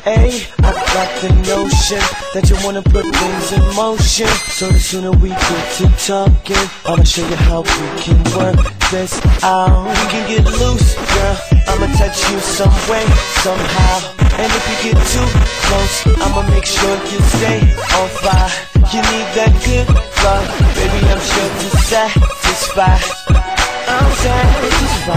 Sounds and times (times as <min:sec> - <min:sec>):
Music: 0:00.0 - 0:25.1.